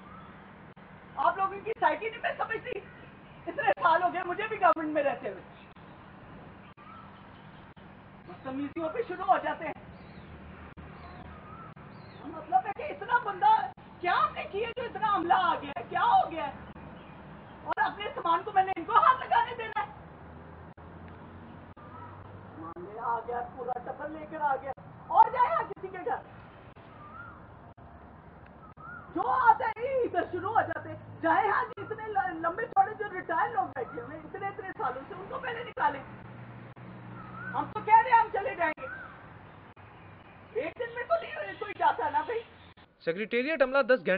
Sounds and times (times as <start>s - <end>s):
Outside, urban or manmade: 0.0s - 44.1s.